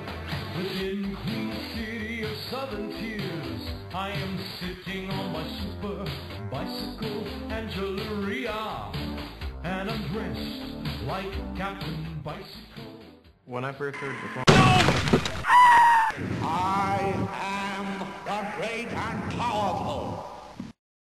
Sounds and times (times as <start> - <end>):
Music: 0.0 - 14.5
Speech: 13.5 - 14.8, 16.4 - 20.4.